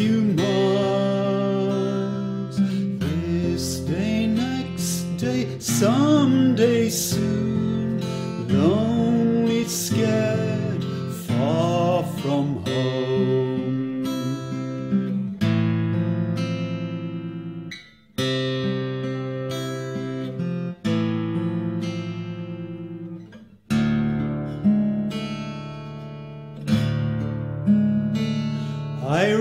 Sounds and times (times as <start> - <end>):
Inside, small room: 0.0 - 29.4
Music: 0.0 - 29.4.